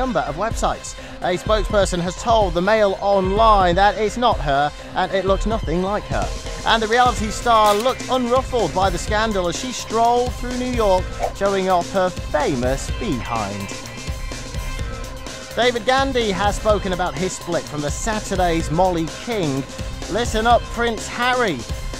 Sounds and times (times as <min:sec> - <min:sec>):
Speech: 0:00.0 - 0:13.7, 0:15.6 - 0:21.6
Music: 0:00.0 - 0:21.9.